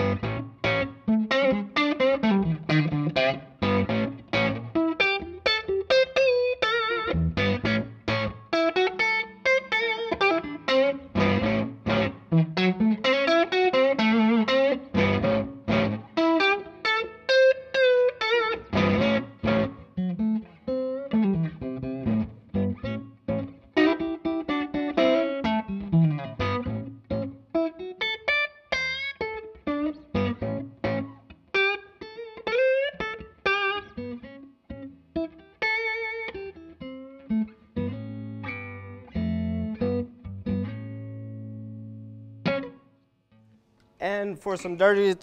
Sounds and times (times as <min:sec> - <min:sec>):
Guitar: 0:00.0 - 0:45.2.